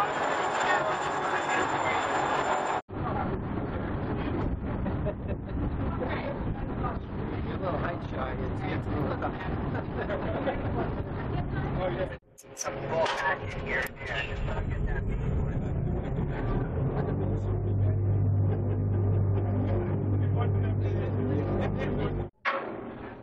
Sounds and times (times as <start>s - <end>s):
Speech: 0.0s - 22.3s.